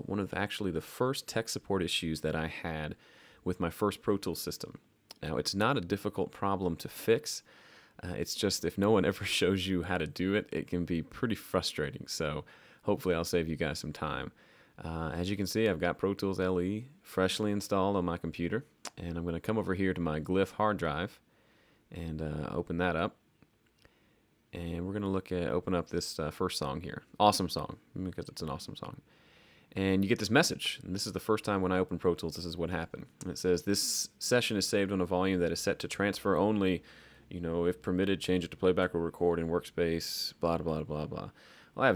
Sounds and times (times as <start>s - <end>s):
Speech: 0.0s - 21.2s, 21.9s - 23.2s, 24.5s - 29.0s, 29.7s - 41.9s.